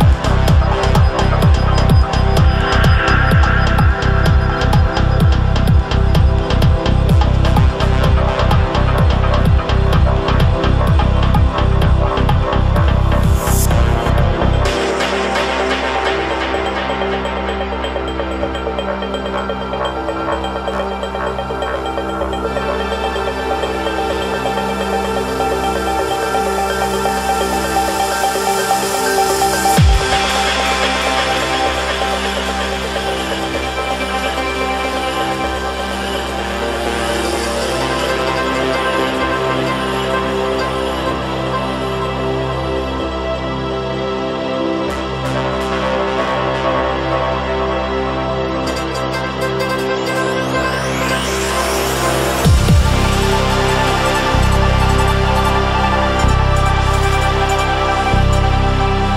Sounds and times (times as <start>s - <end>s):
Electronica: 0.0s - 59.1s.